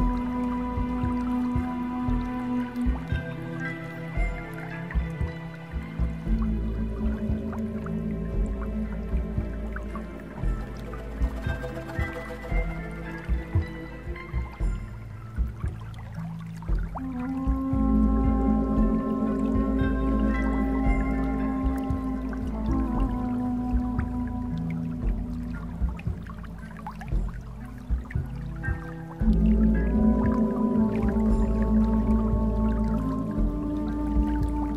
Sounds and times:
Music: 0:00.0 - 0:34.7.

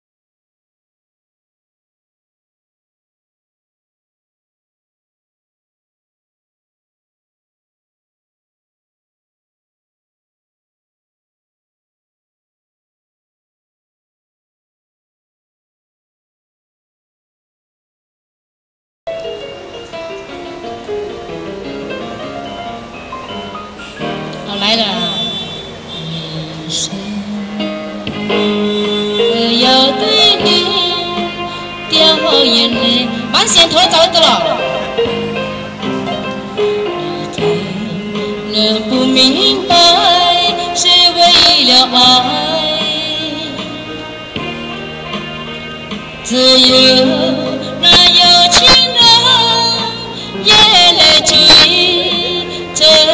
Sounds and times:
Music: 0:19.1 - 0:53.1
Speech: 0:24.5 - 0:25.4, 0:33.3 - 0:34.8.

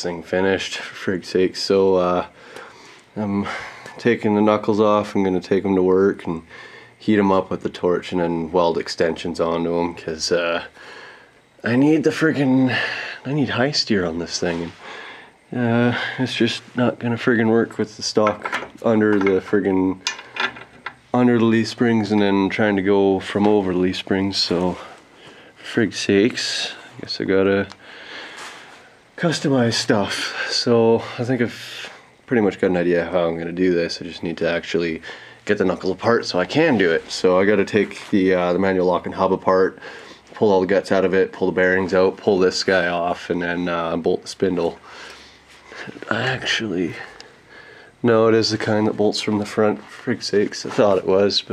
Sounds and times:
Speech: 0:00.0 - 0:02.4, 0:03.2 - 0:10.8, 0:11.6 - 0:14.8, 0:15.5 - 0:20.1, 0:21.1 - 0:25.0, 0:25.6 - 0:27.8, 0:29.2 - 0:39.8, 0:40.4 - 0:44.8, 0:45.8 - 0:47.3, 0:48.0 - 0:51.5
Inside, small room: 0:00.0 - 0:51.5.

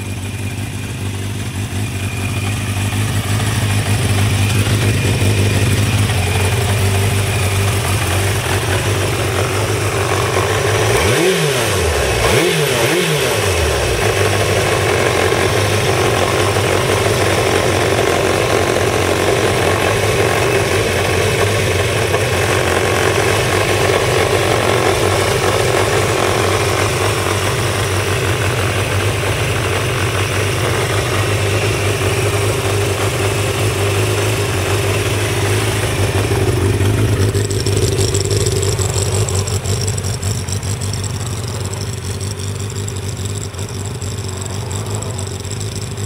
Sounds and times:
Medium engine (mid frequency): 0:00.0 - 0:46.0
Motorcycle: 0:00.0 - 0:46.0.

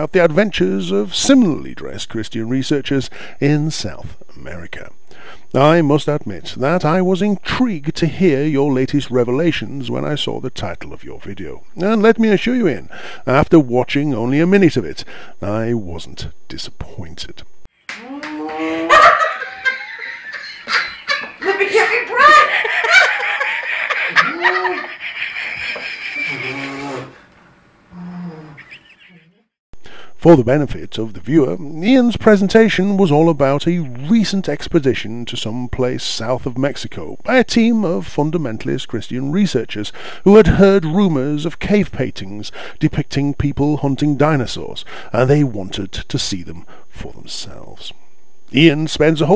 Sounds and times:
Speech: 0:00.0 - 0:17.5, 0:21.4 - 0:22.6, 0:30.2 - 0:49.3.

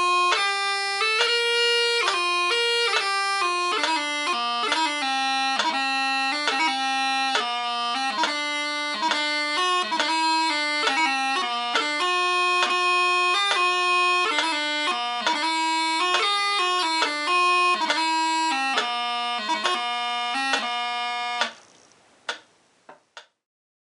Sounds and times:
Wind instrument, woodwind instrument: 0:00.0 - 0:21.6.

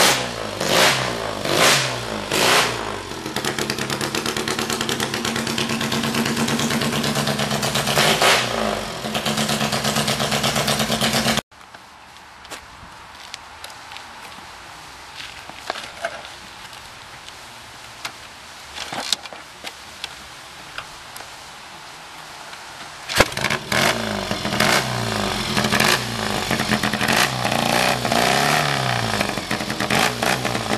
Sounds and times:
Walk, footsteps: 0:11.6 - 0:14.5, 0:15.1 - 0:18.2.

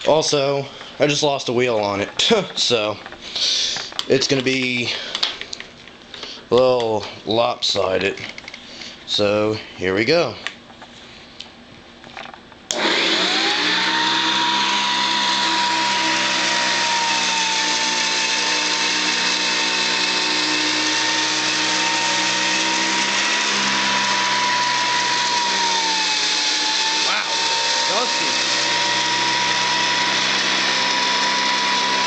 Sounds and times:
Speech: 0:00.0 - 0:03.0, 0:04.1 - 0:05.0, 0:06.5 - 0:08.3, 0:09.1 - 0:10.4, 0:27.1 - 0:28.4
Vacuum cleaner: 0:12.7 - 0:32.0.

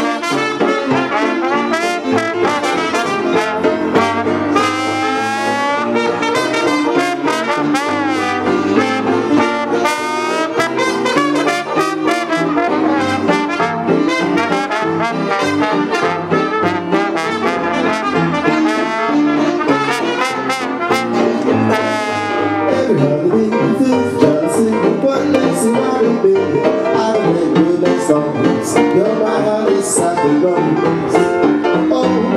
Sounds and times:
Saxophone: 0:00.0 - 0:23.1
Trumpet: 0:00.0 - 0:24.4
Jazz: 0:00.0 - 0:32.3
Trombone: 0:00.0 - 0:32.3.

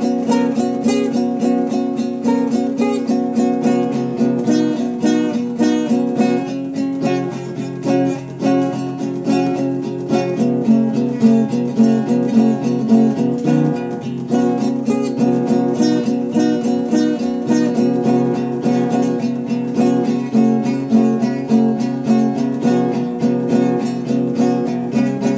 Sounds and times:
Acoustic guitar: 0:00.0 - 0:25.3
Strum: 0:00.0 - 0:25.3.

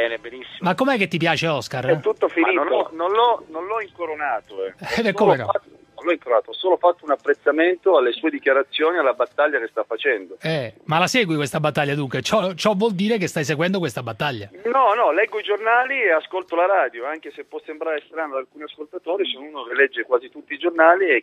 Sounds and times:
Radio: 0:00.0 - 0:00.7, 0:01.8 - 0:10.4, 0:14.4 - 0:21.2
Speech: 0:00.0 - 0:21.2.

